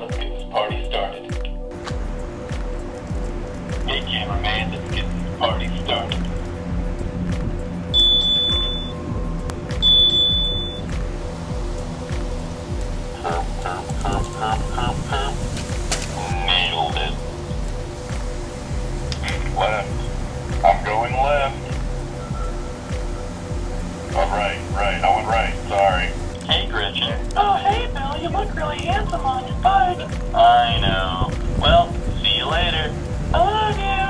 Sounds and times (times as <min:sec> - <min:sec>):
Speech: 0:00.0 - 0:01.4, 0:03.9 - 0:06.2, 0:16.2 - 0:17.2, 0:19.2 - 0:20.0, 0:20.7 - 0:21.6, 0:24.2 - 0:34.0
Music: 0:00.0 - 0:34.0.